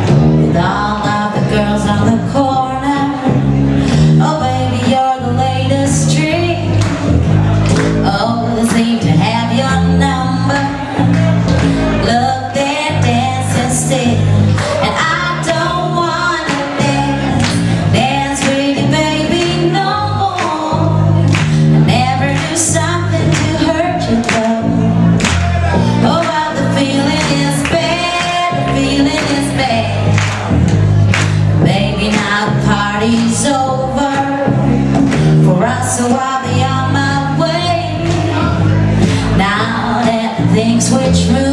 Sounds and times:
Music: 0.0 - 41.5.

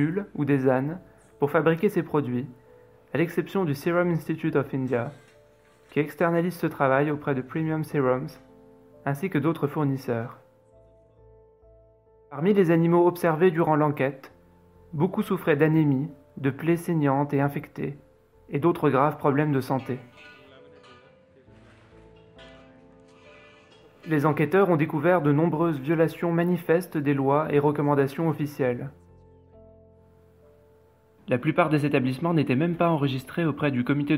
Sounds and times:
Speech: 0.0 - 2.5, 3.1 - 5.2, 6.0 - 8.4, 9.1 - 10.4, 12.4 - 14.3, 15.0 - 21.5, 24.1 - 29.0, 31.3 - 34.1
Music: 0.0 - 34.1.

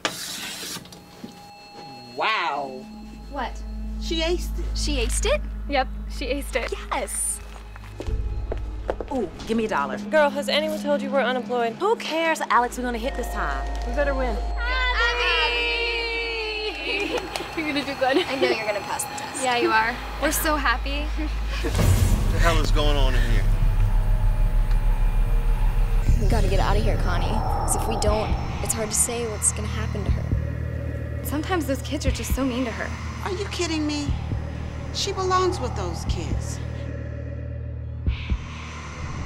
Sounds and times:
Music: 1.2 - 39.2.

